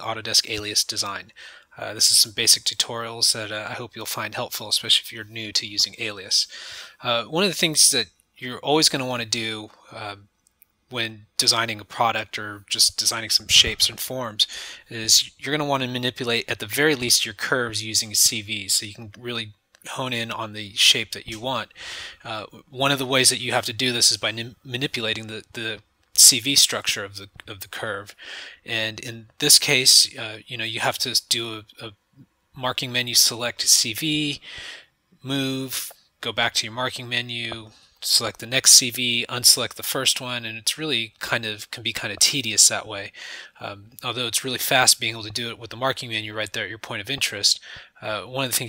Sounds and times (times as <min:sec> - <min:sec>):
Speech: 0:00.0 - 0:10.3, 0:10.9 - 0:34.6, 0:35.2 - 0:48.6.